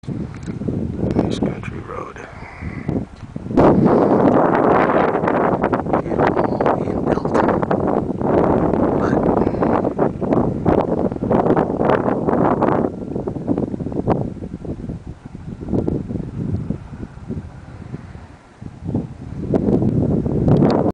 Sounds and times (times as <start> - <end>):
Wind noise (microphone): 0.0 - 20.9.